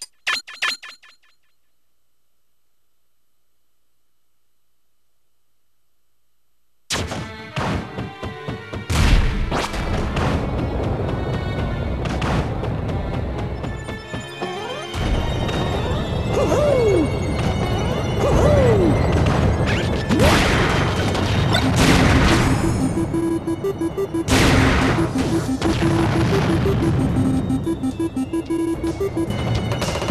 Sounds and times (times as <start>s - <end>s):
Music: 7.1s - 20.2s, 21.4s - 30.1s.